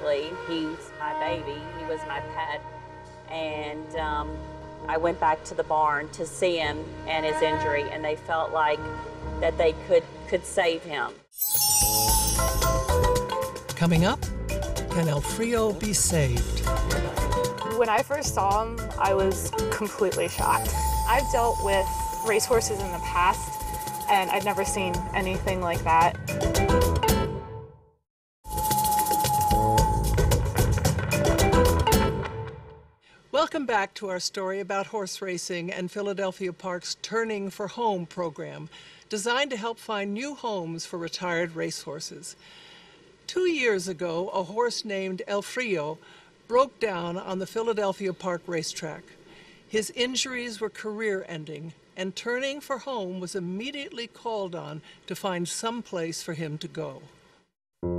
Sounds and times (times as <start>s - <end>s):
Music: 0.0s - 33.0s
Speech: 14.9s - 16.5s, 17.8s - 23.5s, 24.1s - 26.1s, 43.3s - 49.0s.